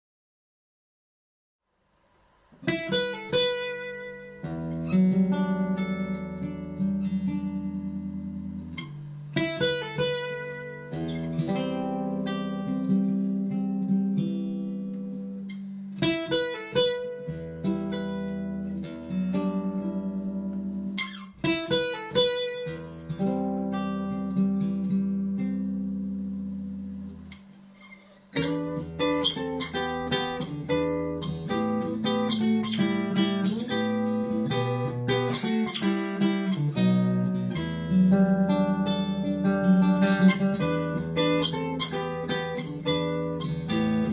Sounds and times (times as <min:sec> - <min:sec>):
Acoustic guitar: 0:02.5 - 0:44.1.